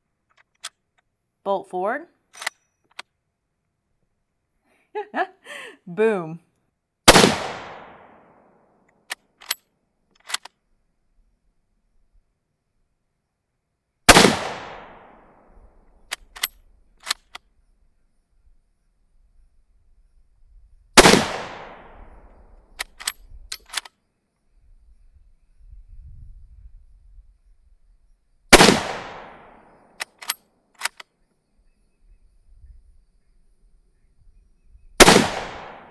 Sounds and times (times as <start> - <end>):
Speech: 1.5 - 2.2, 5.8 - 6.5.